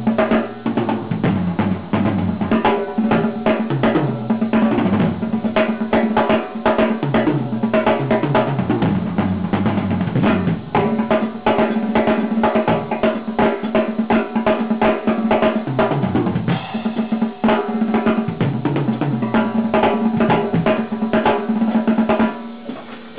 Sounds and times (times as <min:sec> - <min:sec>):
Bass drum: 0:00.0 - 0:22.6
Drum roll: 0:00.0 - 0:23.1.